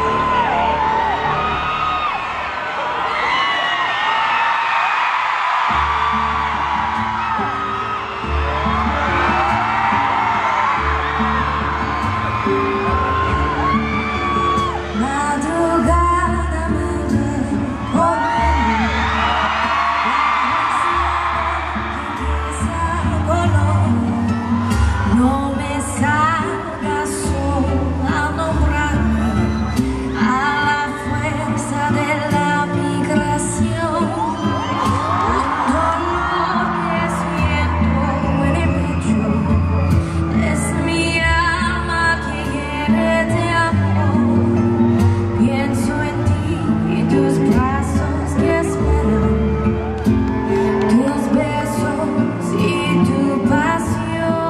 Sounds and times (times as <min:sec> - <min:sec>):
Tender music: 0:05.8 - 0:54.4.